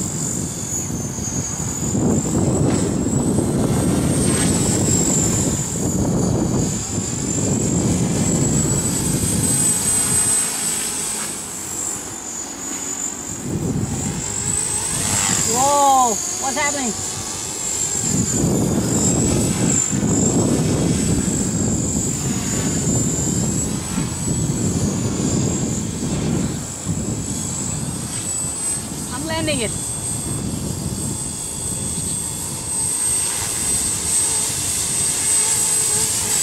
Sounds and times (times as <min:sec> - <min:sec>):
Helicopter: 0:00.0 - 0:36.4.